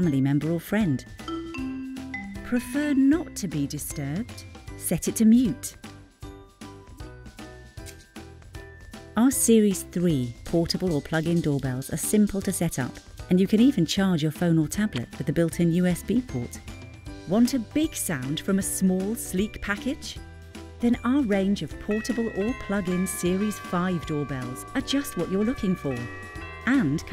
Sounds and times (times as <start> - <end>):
Speech: 0.0 - 1.1, 2.5 - 5.8, 9.2 - 16.6, 17.3 - 20.2, 20.8 - 26.1, 26.7 - 27.1
Music: 0.0 - 27.1.